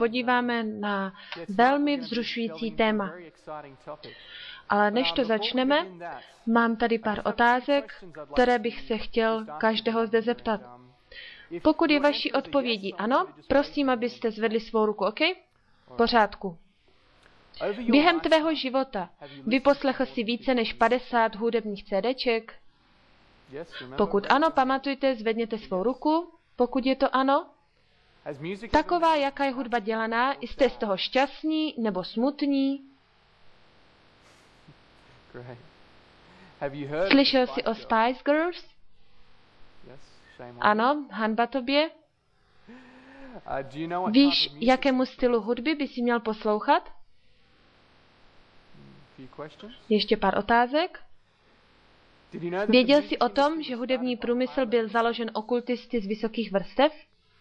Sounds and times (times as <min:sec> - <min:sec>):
Speech: 0:00.0 - 0:16.6, 0:17.6 - 0:22.6, 0:23.6 - 0:27.5, 0:28.3 - 0:32.9, 0:35.3 - 0:35.7, 0:36.6 - 0:38.7, 0:39.9 - 0:42.0, 0:43.2 - 0:46.9, 0:48.8 - 0:51.0, 0:52.4 - 0:56.9.